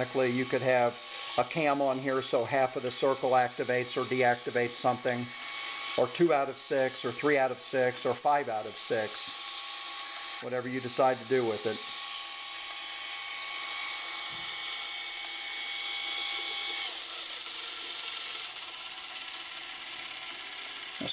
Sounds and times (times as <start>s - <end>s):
Gears: 0.0s - 21.1s
Ratchet, pawl: 6.9s - 21.1s.